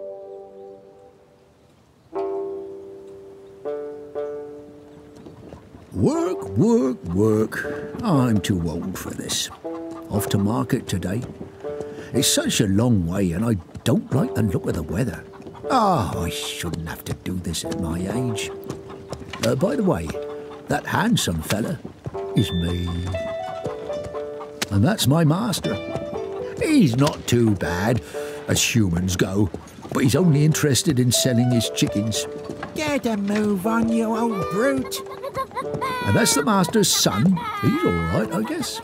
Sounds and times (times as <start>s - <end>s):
Music: 0.0s - 1.2s, 2.2s - 38.8s
Speech: 6.0s - 9.5s, 10.1s - 11.3s, 12.2s - 18.5s, 19.4s - 21.8s, 22.4s - 23.1s, 26.6s - 35.0s, 36.1s - 38.8s.